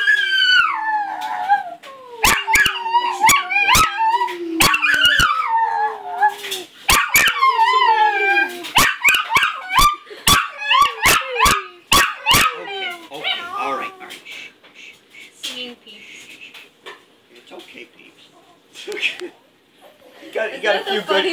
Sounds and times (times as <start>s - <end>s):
Howl: 0.0s - 9.9s.